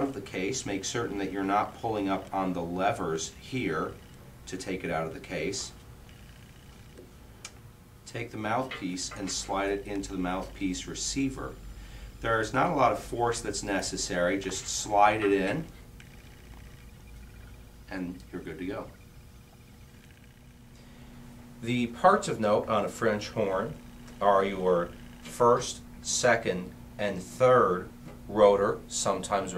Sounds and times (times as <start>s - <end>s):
Speech: 0.0s - 5.8s, 8.1s - 11.6s, 12.2s - 15.7s, 17.9s - 18.9s, 21.6s - 29.5s.